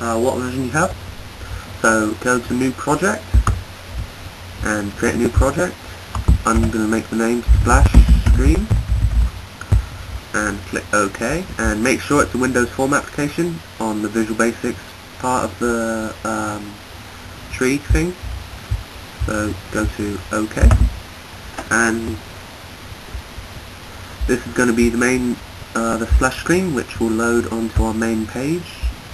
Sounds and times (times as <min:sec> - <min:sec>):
Speech: 0:00.0 - 0:01.0, 0:01.8 - 0:03.3, 0:04.6 - 0:05.8, 0:06.4 - 0:08.7, 0:10.4 - 0:16.8, 0:17.5 - 0:18.2, 0:19.2 - 0:20.9, 0:21.7 - 0:22.2, 0:24.3 - 0:29.0.